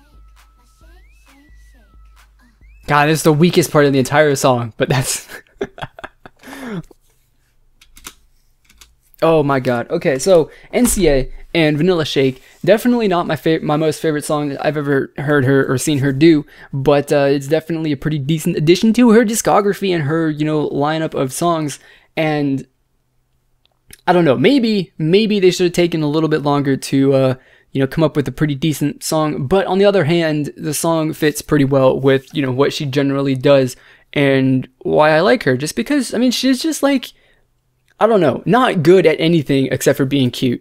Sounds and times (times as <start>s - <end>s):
Inside, small room: 0.0s - 40.6s
Speech: 2.9s - 5.3s, 9.2s - 22.7s, 24.0s - 37.2s, 38.0s - 40.6s.